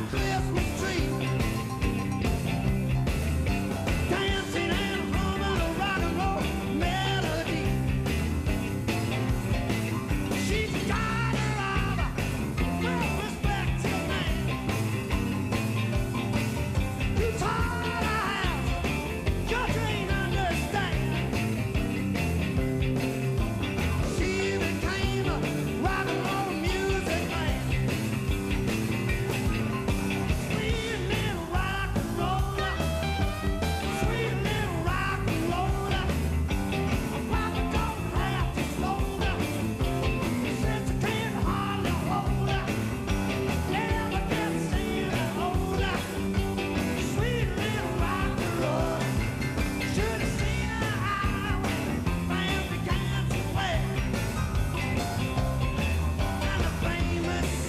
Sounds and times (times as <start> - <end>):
Music: 0.0 - 57.6.